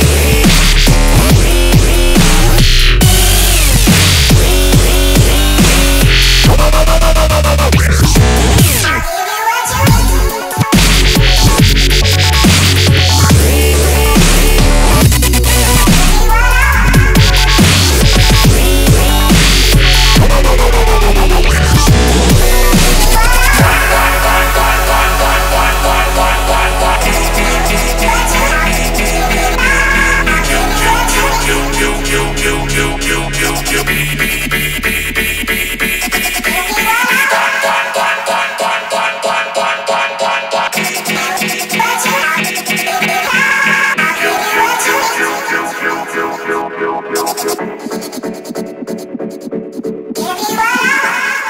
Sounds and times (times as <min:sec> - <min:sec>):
Dubstep: 0:00.0 - 0:51.4.